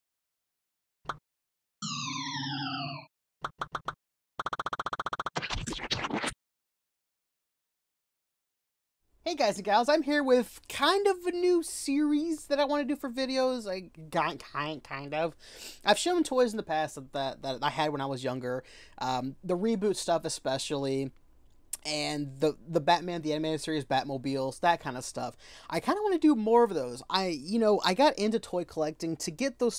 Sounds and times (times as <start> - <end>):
Speech: 9.3 - 21.1, 21.8 - 29.7.